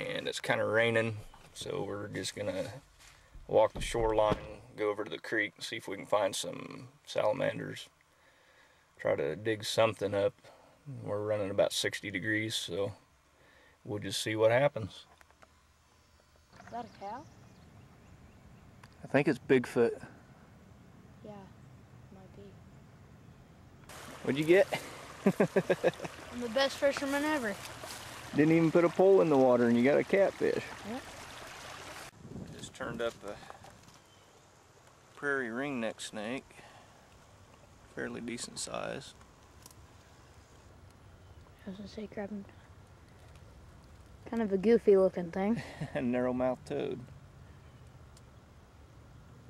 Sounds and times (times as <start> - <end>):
Outside, rural or natural: 0.0 - 49.5.